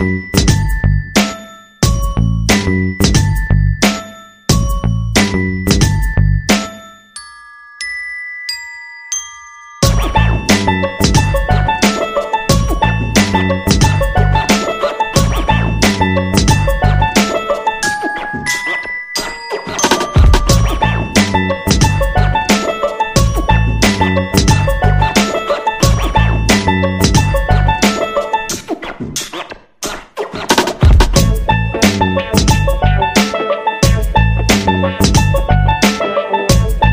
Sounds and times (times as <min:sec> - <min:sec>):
Music: 0:00.0 - 0:36.9.